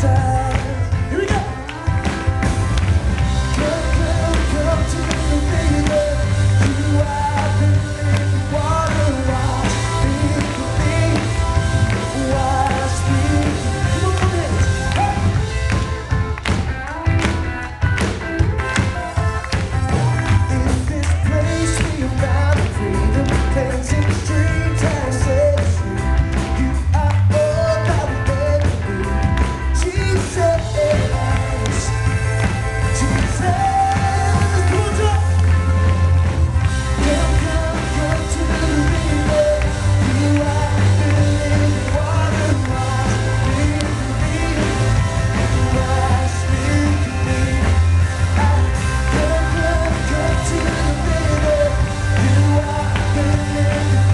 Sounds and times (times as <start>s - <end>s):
Male singing: 0.0s - 2.3s, 3.5s - 15.4s, 20.2s - 29.1s, 29.8s - 32.0s, 32.9s - 35.3s, 37.0s - 54.1s
Music: 0.0s - 54.1s.